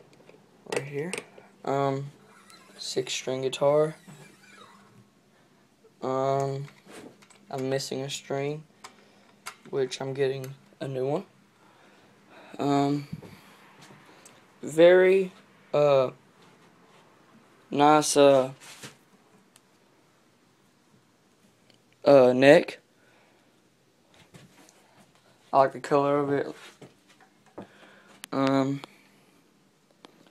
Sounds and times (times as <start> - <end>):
Speech: 0.7 - 2.2, 2.8 - 4.0, 6.0 - 6.8, 7.5 - 8.7, 9.7 - 11.3, 12.6 - 13.2, 14.6 - 16.2, 17.7 - 18.6, 22.0 - 22.8, 25.5 - 26.6, 28.3 - 28.9.